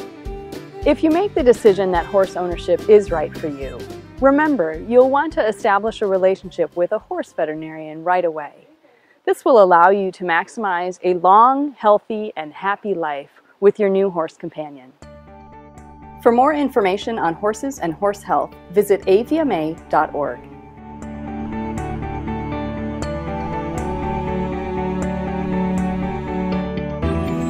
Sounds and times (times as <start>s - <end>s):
Music: 0.0s - 8.9s, 14.7s - 27.5s
Speech: 0.9s - 14.9s, 16.2s - 20.5s.